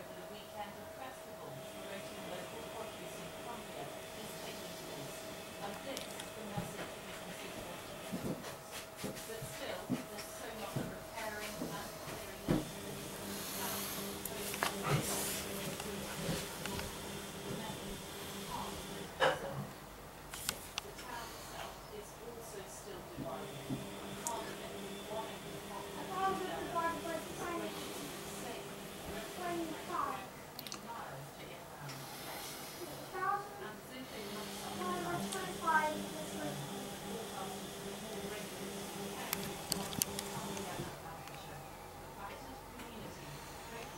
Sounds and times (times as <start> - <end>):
Speech: 0.0 - 19.6, 20.5 - 43.9.